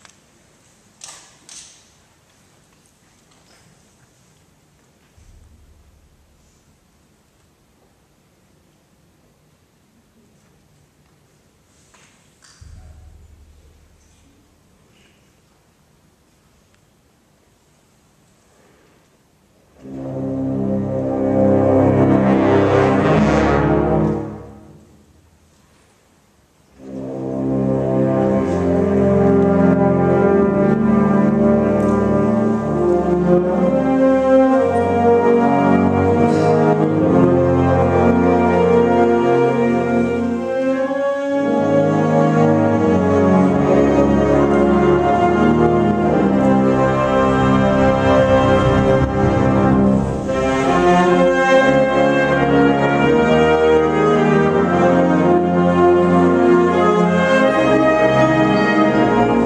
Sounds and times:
Orchestra: 0.0 - 59.4.

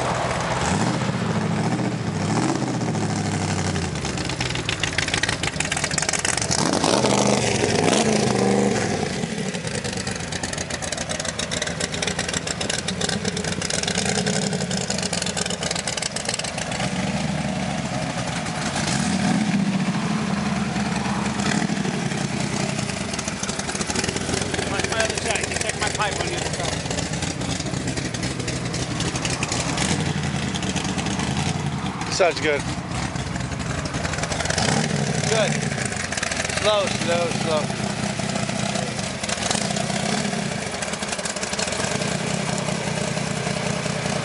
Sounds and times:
Car: 0.0 - 44.2
Outside, rural or natural: 0.0 - 44.2
Speech: 24.7 - 26.7, 35.3 - 35.6, 36.6 - 37.7.

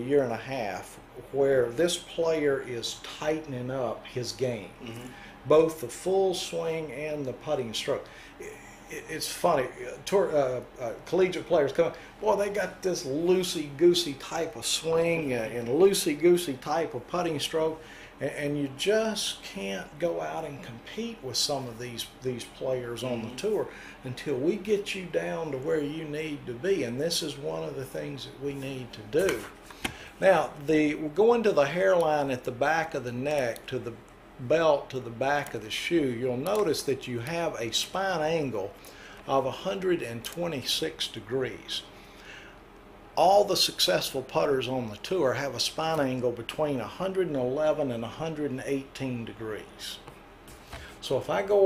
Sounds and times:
Speech: 0.0 - 29.5, 30.2 - 41.9, 43.2 - 50.1, 51.0 - 51.6.

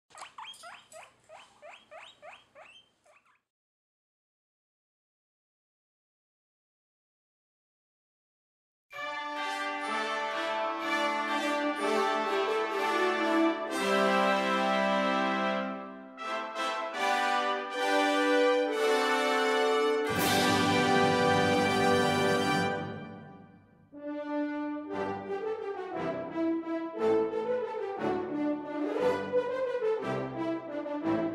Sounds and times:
Domestic animals, pets: 0.1 - 3.5
Music: 8.9 - 31.3.

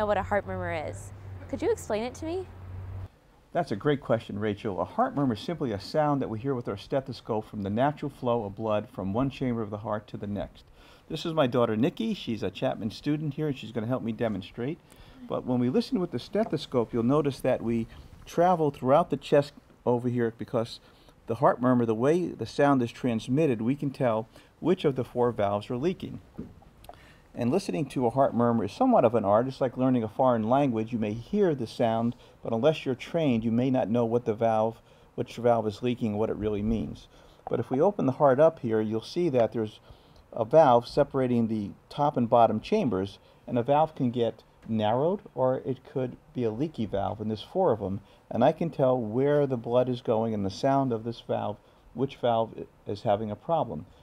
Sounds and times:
Speech: 0.0 - 2.5, 3.5 - 26.2, 27.4 - 39.8, 40.4 - 53.9.

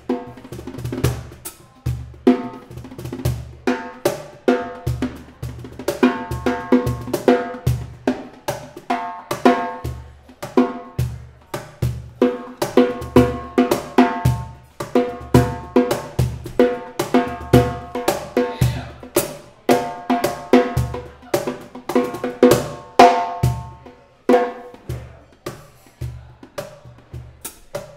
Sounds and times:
Drum kit: 0.0 - 27.9
Drum roll: 0.0 - 27.9.

